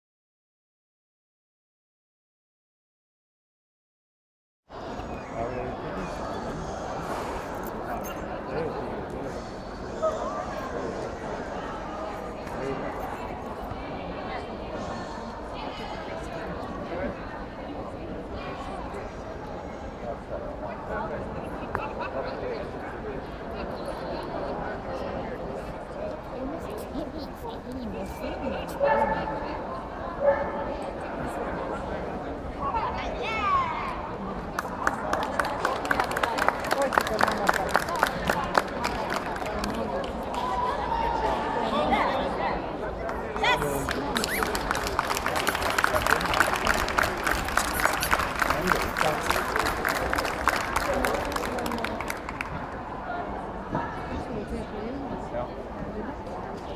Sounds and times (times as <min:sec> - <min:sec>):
Speech: 0:05.2 - 0:56.7.